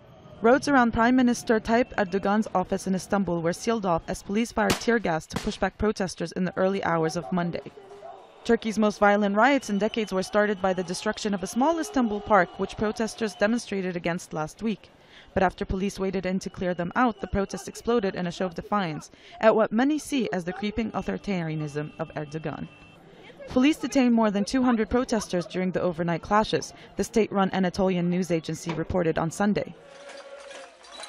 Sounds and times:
Speech: 0:00.4 - 0:07.7, 0:08.5 - 0:22.7, 0:23.3 - 0:29.8.

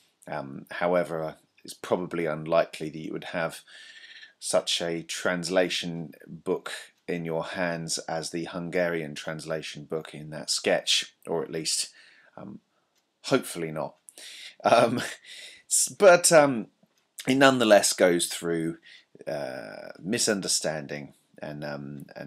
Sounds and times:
Speech: 0:00.3 - 0:12.6, 0:13.3 - 0:22.2.

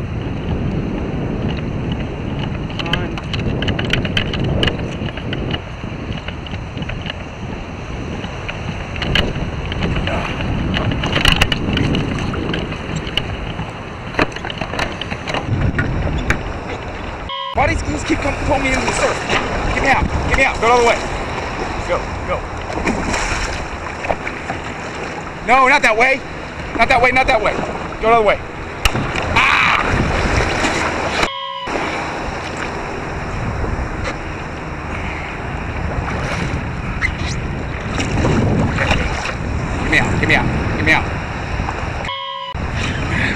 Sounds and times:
Rowboat, canoe, kayak: 0:00.0 - 0:43.3
Speech: 0:02.8 - 0:03.2, 0:17.6 - 0:19.2, 0:19.8 - 0:21.0, 0:21.8 - 0:22.4, 0:25.4 - 0:26.2, 0:26.8 - 0:28.4, 0:39.8 - 0:41.1.

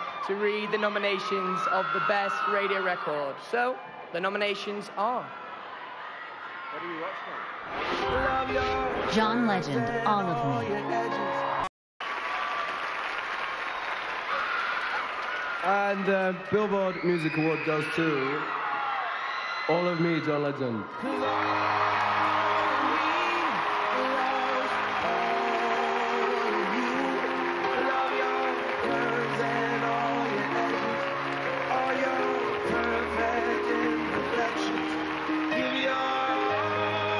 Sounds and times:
Theme music: 0:07.7 - 0:11.7, 0:21.0 - 0:37.2.

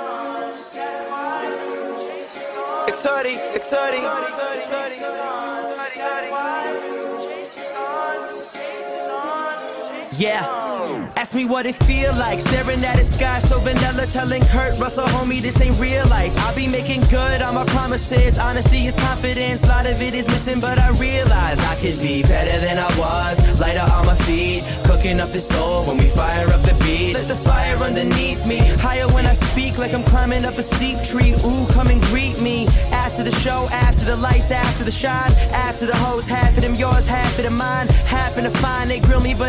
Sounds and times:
Music: 0:00.0 - 0:39.4.

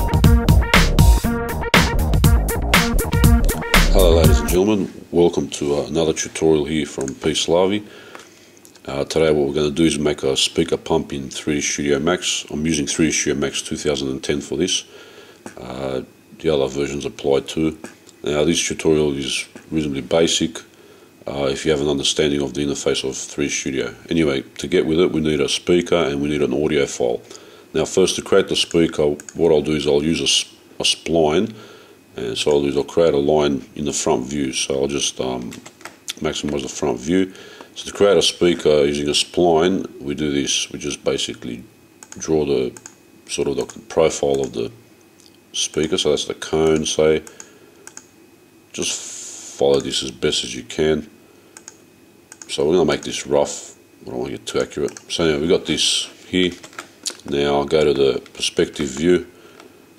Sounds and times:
Speech: 0:03.9 - 0:07.9, 0:08.8 - 0:14.9, 0:15.5 - 0:20.7, 0:21.3 - 0:31.6, 0:32.2 - 0:44.8, 0:45.5 - 0:47.3, 0:48.7 - 0:51.2, 0:52.5 - 0:59.3.

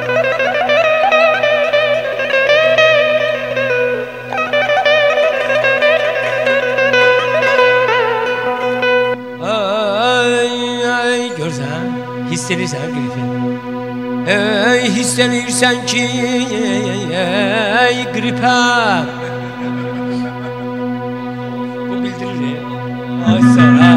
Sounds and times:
Music: 0:00.0 - 0:23.9.

